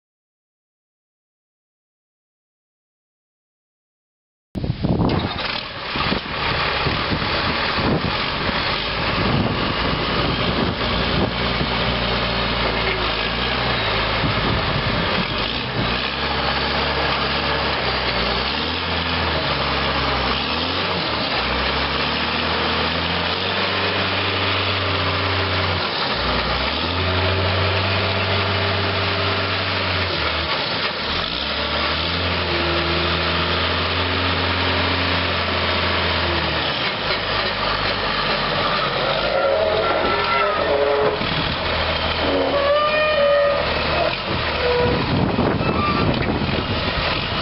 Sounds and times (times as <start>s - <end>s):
Vehicle: 4.6s - 47.4s.